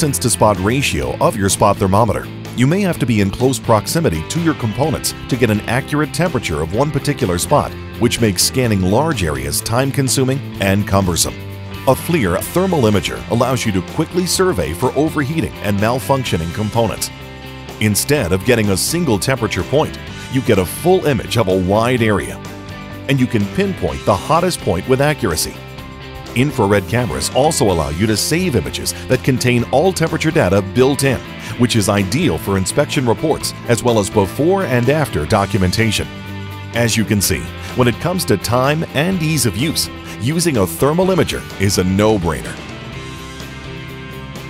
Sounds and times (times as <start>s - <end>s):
Speech: 0.0s - 17.1s, 17.8s - 22.4s, 23.1s - 25.6s, 26.4s - 36.1s, 36.8s - 42.6s
Music: 0.0s - 44.5s.